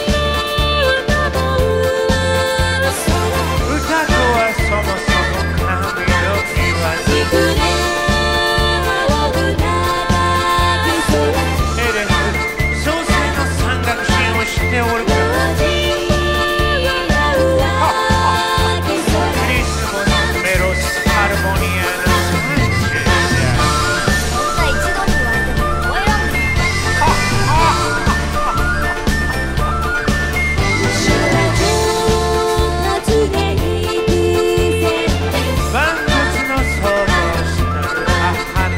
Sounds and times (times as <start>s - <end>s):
Music: 0.0s - 38.7s.